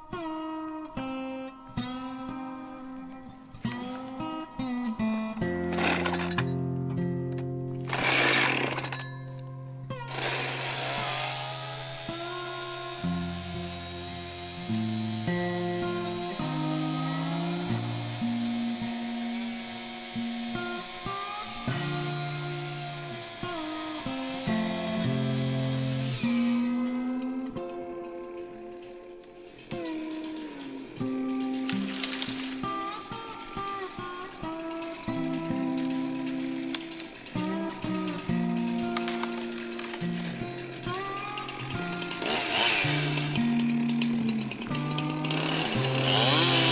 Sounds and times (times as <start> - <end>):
Music: 0.0 - 46.7.